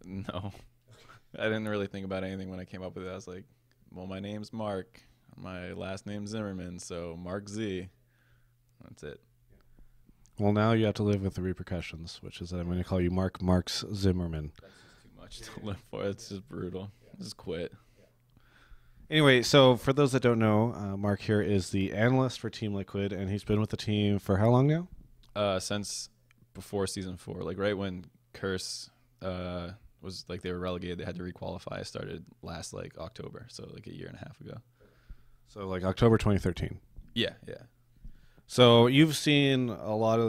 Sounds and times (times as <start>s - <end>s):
Speech: 1.4s - 8.0s, 8.8s - 9.2s, 10.4s - 18.0s, 19.1s - 34.6s, 35.5s - 37.7s, 38.5s - 40.2s.